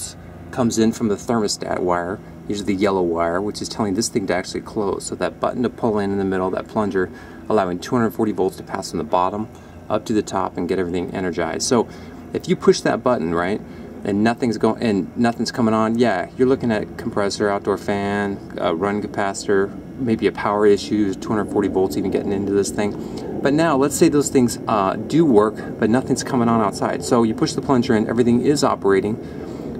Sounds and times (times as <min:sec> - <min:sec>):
Speech: 0:00.0 - 0:29.2.